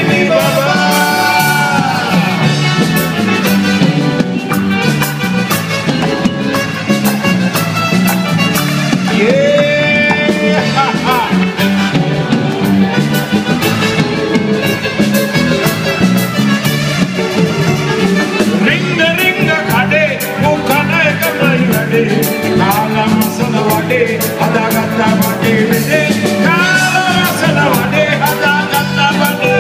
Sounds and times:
Singing: 0:00.0 - 0:02.5, 0:18.6 - 0:29.6
Rock and roll: 0:00.0 - 0:29.6.

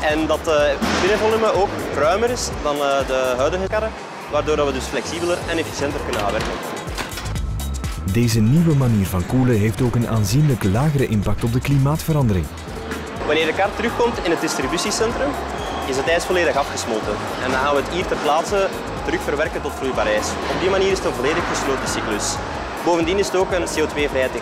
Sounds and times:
Speech: 0:00.0 - 0:06.4, 0:08.1 - 0:12.5
Music: 0:00.0 - 0:24.4.

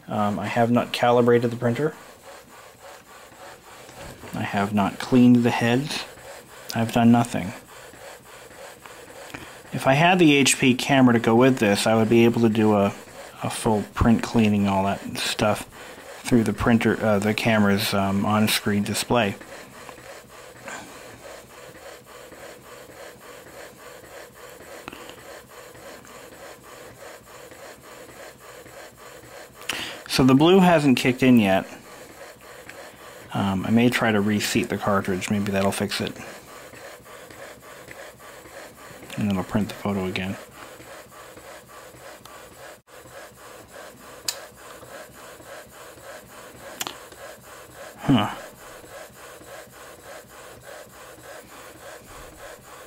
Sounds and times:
Printer: 0:00.0 - 0:52.8
Speech: 0:00.1 - 0:02.0, 0:04.3 - 0:06.1, 0:06.7 - 0:07.6, 0:09.7 - 0:19.4, 0:30.1 - 0:31.7, 0:33.3 - 0:36.2, 0:39.1 - 0:40.5.

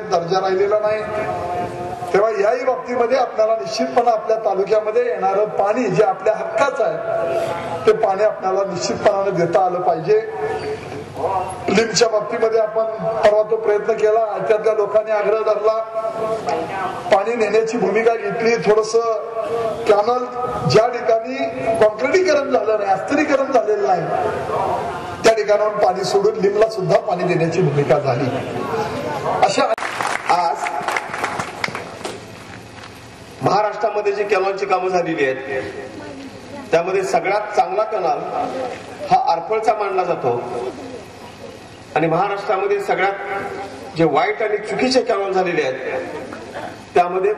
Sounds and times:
Male speech, man speaking: 0:00.0 - 0:28.5, 0:29.1 - 0:31.0, 0:33.4 - 0:35.8, 0:36.7 - 0:40.8, 0:42.0 - 0:43.4, 0:44.0 - 0:46.1, 0:47.0 - 0:47.3
Narration, monologue: 0:00.0 - 0:47.3.

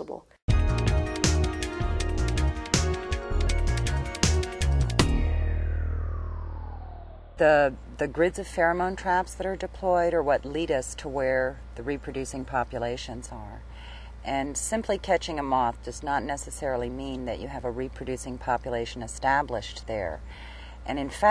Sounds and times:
Speech: 0:00.0 - 0:00.3, 0:07.4 - 0:13.6, 0:14.3 - 0:20.2, 0:20.9 - 0:21.3
Music: 0:00.5 - 0:06.9.

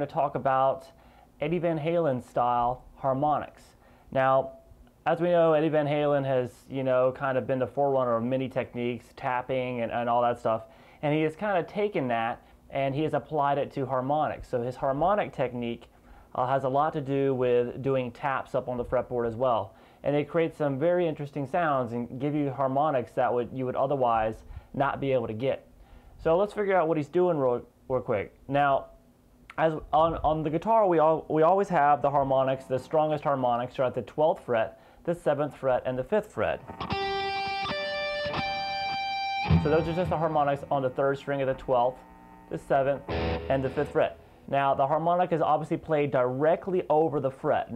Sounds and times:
Speech: 0:00.0 - 0:36.6, 0:39.6 - 0:47.7.

